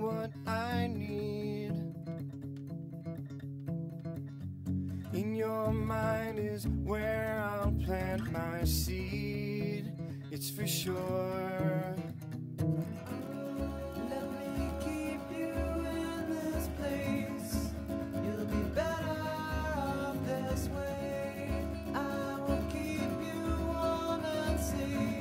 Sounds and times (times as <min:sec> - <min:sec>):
Music: 0:00.0 - 0:25.2.